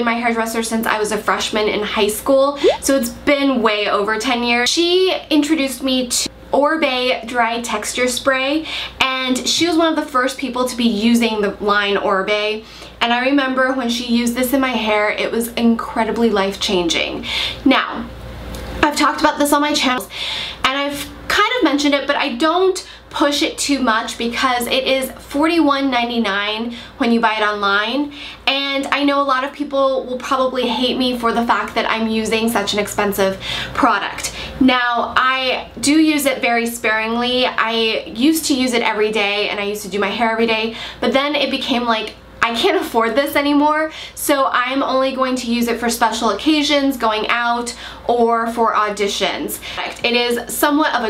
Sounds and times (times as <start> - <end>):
Speech: 0.0 - 18.1, 18.8 - 51.1.